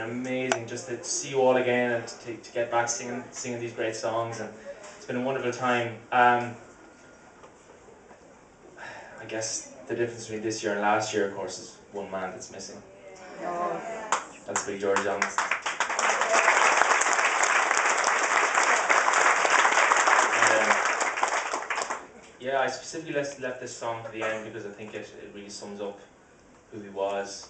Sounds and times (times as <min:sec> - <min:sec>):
Speech: 0:00.0 - 0:06.6, 0:09.2 - 0:15.4, 0:20.4 - 0:20.8, 0:22.4 - 0:26.1, 0:26.7 - 0:27.5.